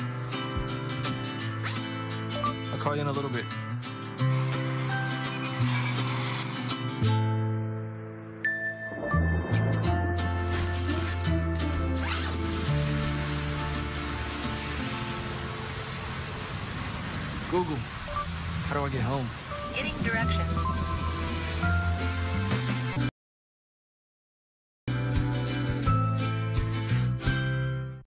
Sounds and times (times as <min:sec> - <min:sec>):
Music: 0:00.0 - 0:16.4, 0:17.5 - 0:23.1, 0:24.9 - 0:28.0
Speech: 0:02.7 - 0:03.6, 0:17.5 - 0:17.9, 0:18.7 - 0:20.5.